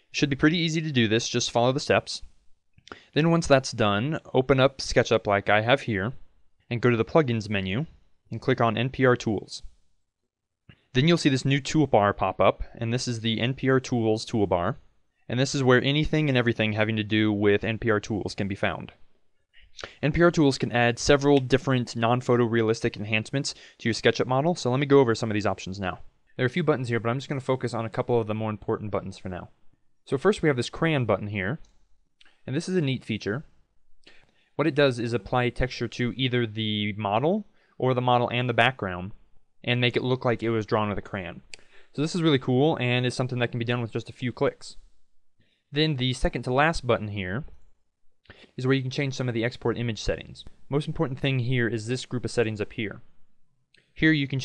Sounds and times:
Speech: 0:00.0 - 0:02.3, 0:02.9 - 0:09.7, 0:10.9 - 0:19.0, 0:19.6 - 0:31.7, 0:32.4 - 0:33.6, 0:34.6 - 0:44.8, 0:45.7 - 0:47.6, 0:48.5 - 0:53.1, 0:54.0 - 0:54.4.

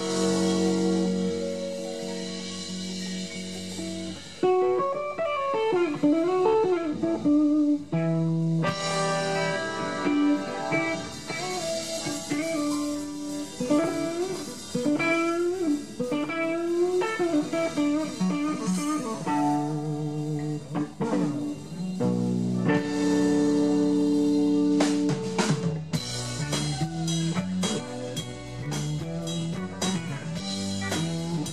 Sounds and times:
Blues: 0:00.0 - 0:31.5.

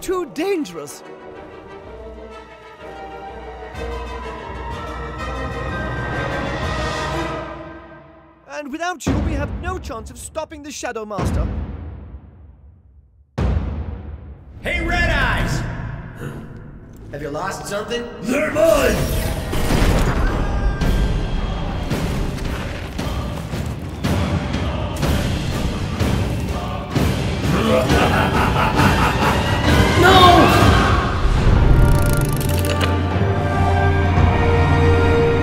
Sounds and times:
Music: 0:00.0 - 0:35.4
Speech: 0:08.5 - 0:11.5, 0:14.6 - 0:15.8, 0:17.1 - 0:19.1.

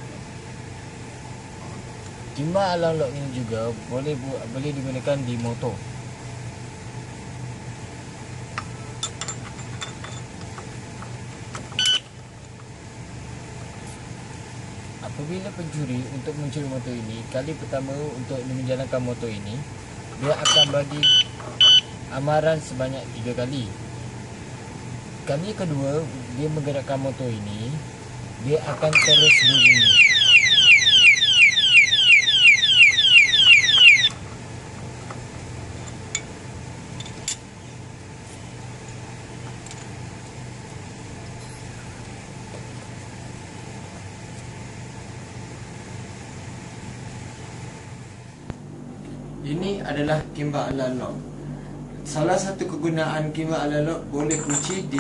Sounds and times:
Speech: 0:02.4 - 0:05.9, 0:15.0 - 0:21.1, 0:22.1 - 0:23.8, 0:25.2 - 0:29.9, 0:49.4 - 0:51.2, 0:52.1 - 0:55.0
Alarm: 0:11.8 - 0:12.1, 0:20.5 - 0:21.9, 0:29.0 - 0:34.2.

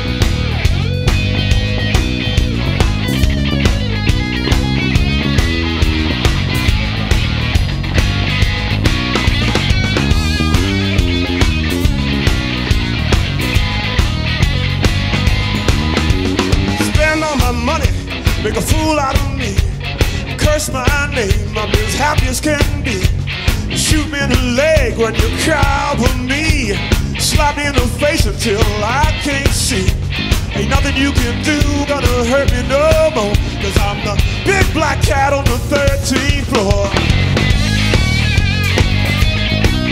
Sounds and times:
Music: 0:00.0 - 0:39.9.

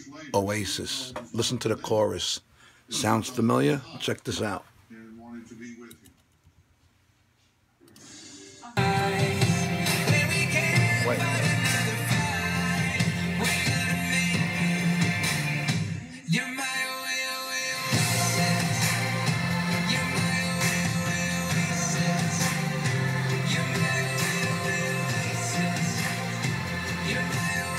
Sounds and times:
Music: 0:08.8 - 0:27.7.

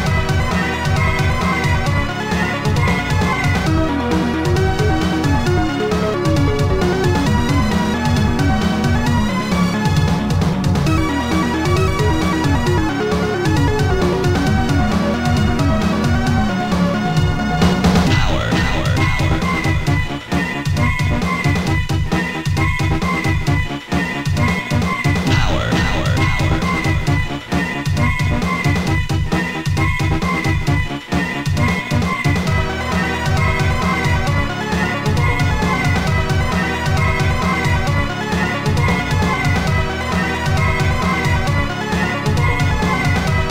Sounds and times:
Background music: 0:00.0 - 0:43.5
Exciting music: 0:00.0 - 0:43.5.

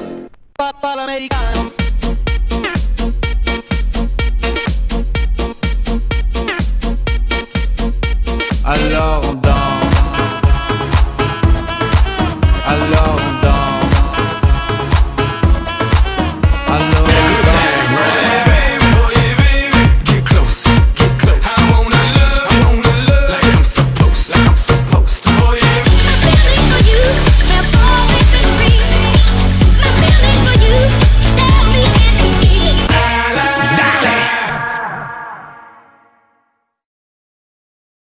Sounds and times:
Music: 0:00.0 - 0:36.8.

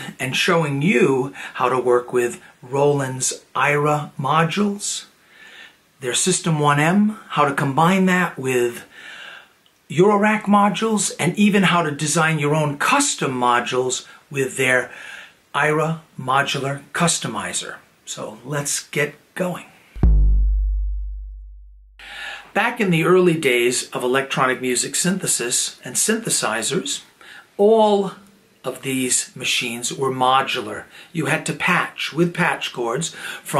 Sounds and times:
Speech: 0:00.0 - 0:05.1, 0:06.0 - 0:08.9, 0:09.9 - 0:19.8, 0:22.5 - 0:33.5.

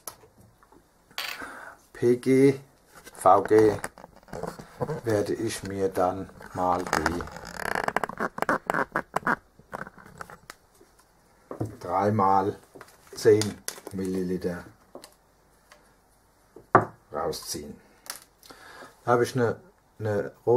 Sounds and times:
Speech: 0:02.0 - 0:03.8, 0:05.0 - 0:07.4, 0:11.7 - 0:14.8, 0:17.1 - 0:17.8, 0:19.0 - 0:20.5.

